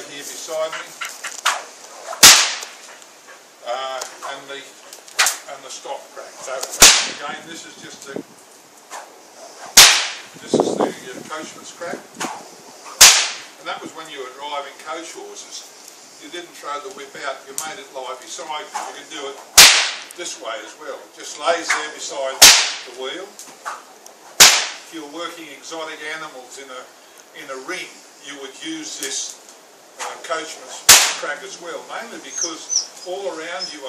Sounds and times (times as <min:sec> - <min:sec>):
Whip: 0:02.2 - 0:02.8, 0:06.6 - 0:07.2, 0:09.8 - 0:10.3, 0:13.0 - 0:13.5, 0:19.6 - 0:20.1, 0:22.4 - 0:22.9, 0:24.4 - 0:24.8, 0:30.9 - 0:31.2.